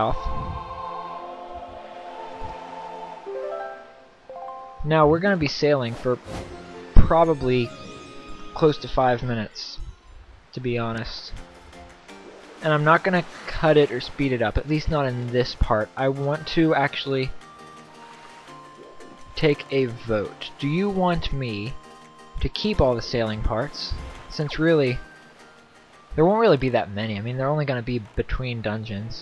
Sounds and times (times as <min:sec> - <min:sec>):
Speech: 0:00.0 - 0:00.4, 0:04.8 - 0:06.2, 0:07.0 - 0:07.7, 0:08.6 - 0:09.9, 0:10.6 - 0:11.4, 0:12.6 - 0:17.4, 0:19.4 - 0:21.8, 0:22.4 - 0:25.0, 0:26.2 - 0:29.2
Music: 0:00.0 - 0:29.2.